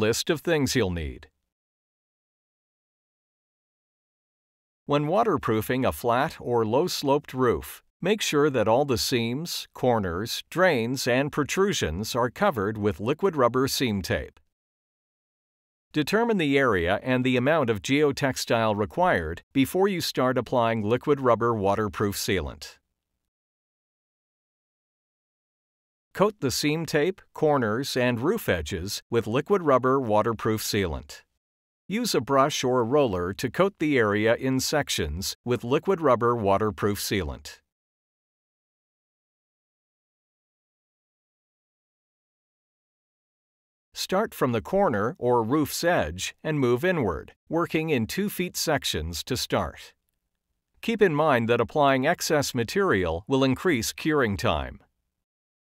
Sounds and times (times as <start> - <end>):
Speech: 0.0 - 1.4, 4.9 - 14.4, 16.0 - 22.8, 26.2 - 31.3, 31.9 - 37.7, 44.0 - 50.0, 50.8 - 54.9.